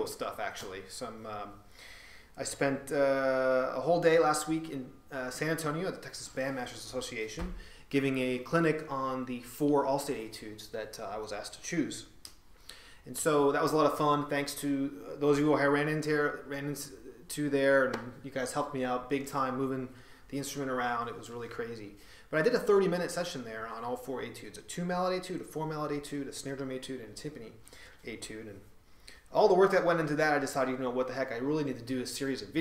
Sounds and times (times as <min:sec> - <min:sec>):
Speech: 0:00.0 - 0:01.6, 0:02.4 - 0:12.2, 0:13.0 - 0:28.7, 0:29.3 - 0:32.6.